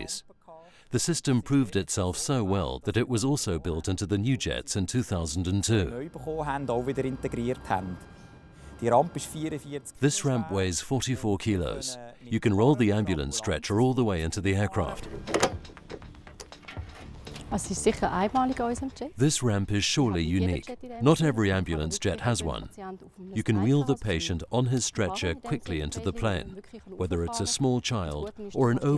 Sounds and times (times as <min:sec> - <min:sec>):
Speech: 0:00.0 - 0:08.0, 0:08.8 - 0:15.0, 0:17.5 - 0:28.9.